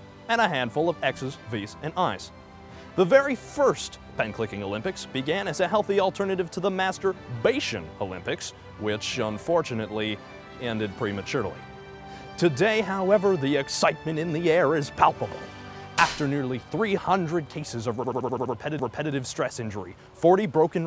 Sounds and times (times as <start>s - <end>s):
Music: 0.0s - 20.8s
Speech: 0.3s - 2.3s, 3.0s - 11.6s, 12.4s - 15.4s, 16.0s - 20.8s
Slap, smack: 16.0s - 16.3s.